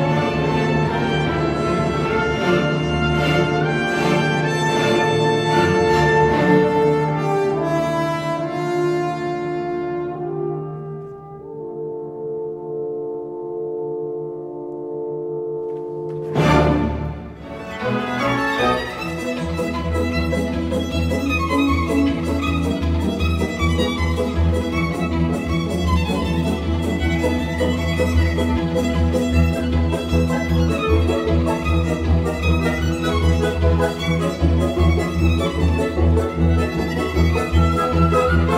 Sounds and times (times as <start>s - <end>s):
Cello: 0.0s - 13.4s, 15.6s - 38.5s.